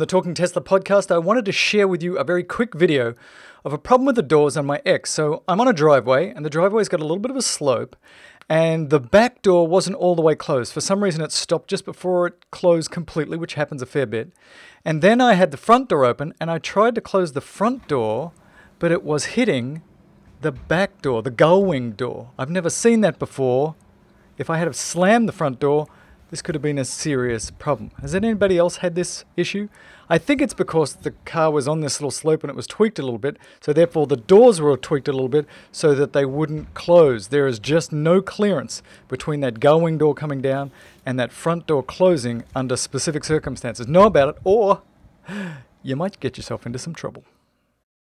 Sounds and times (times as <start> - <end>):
Speech: 0.0 - 19.8, 20.4 - 23.8, 24.4 - 44.8, 45.8 - 47.3.